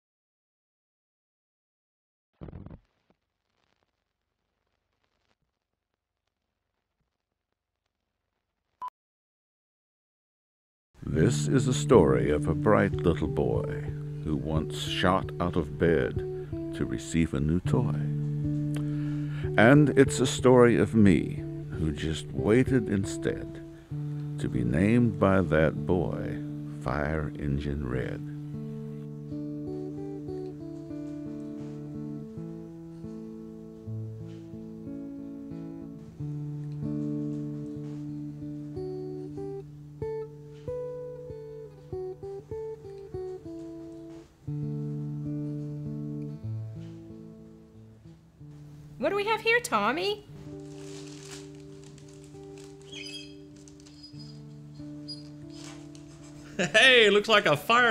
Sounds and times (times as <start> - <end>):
Speech: 11.0 - 18.2, 19.6 - 23.6, 24.4 - 28.3, 49.0 - 50.3, 56.7 - 57.9
Music: 11.0 - 57.9.